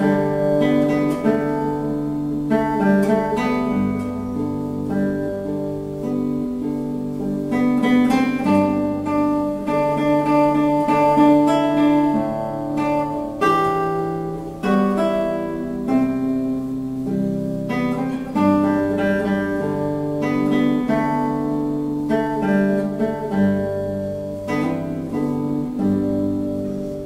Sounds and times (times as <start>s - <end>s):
Acoustic guitar: 0.0s - 27.0s.